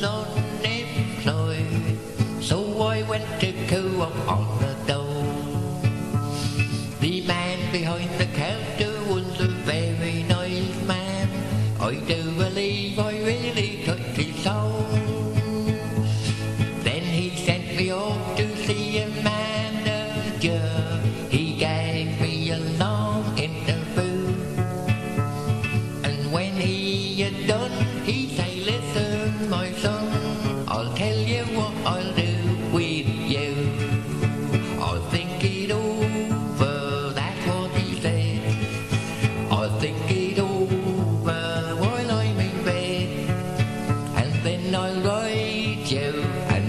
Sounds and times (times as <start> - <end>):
Male singing: 0.0 - 5.5, 7.0 - 15.7, 16.8 - 24.6, 26.0 - 34.1, 34.8 - 38.7, 39.4 - 43.4, 44.1 - 46.6
Music: 0.0 - 46.6.